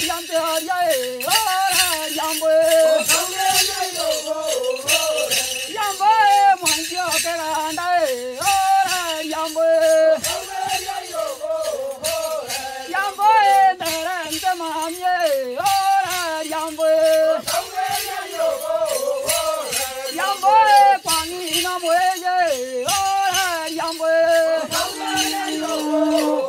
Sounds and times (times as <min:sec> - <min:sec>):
Choir: 0:00.0 - 0:26.4
Male singing: 0:00.0 - 0:26.4.